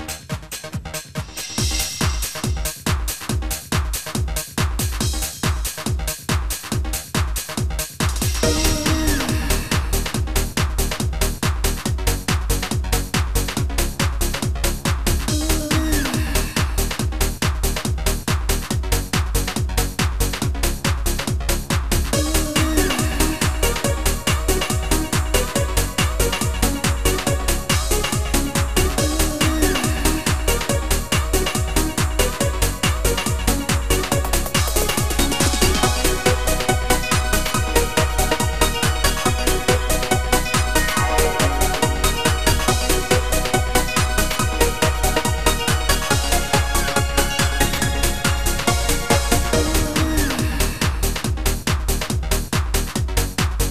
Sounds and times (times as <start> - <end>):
Music: 0.0 - 53.7.